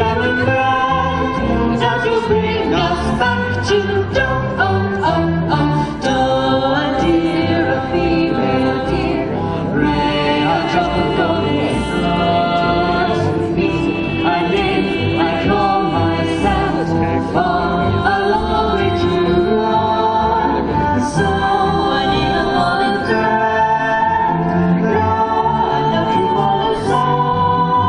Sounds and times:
A capella: 0.0s - 27.8s.

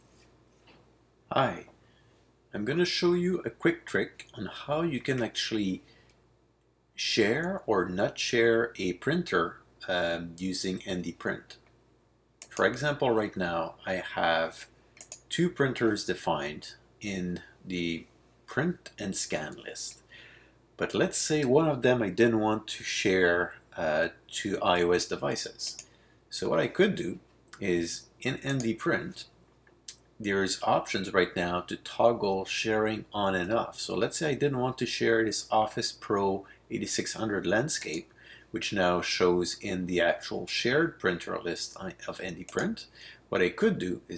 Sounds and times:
Speech: 1.3s - 1.7s, 2.5s - 5.9s, 7.0s - 11.6s, 12.5s - 20.0s, 20.8s - 44.1s.

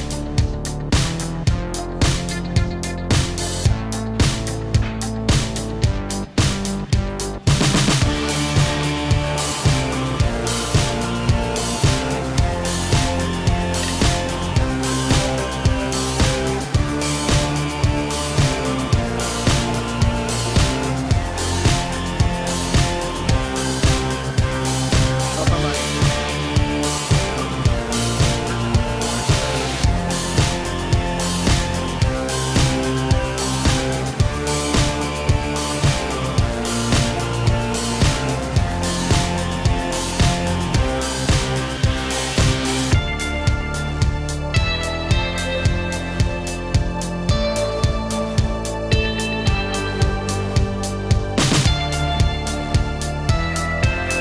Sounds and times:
Music: 0.0s - 54.2s.

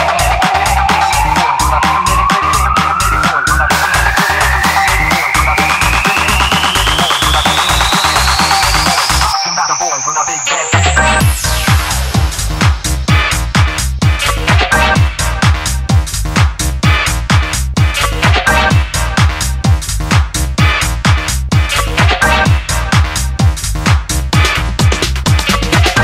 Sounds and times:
Electronic dance music: 0.0s - 26.0s
House music: 0.0s - 26.0s.

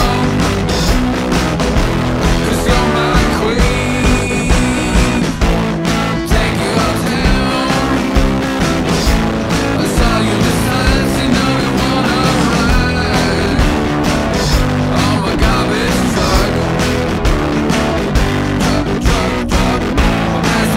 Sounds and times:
Music: 0.0s - 20.7s.

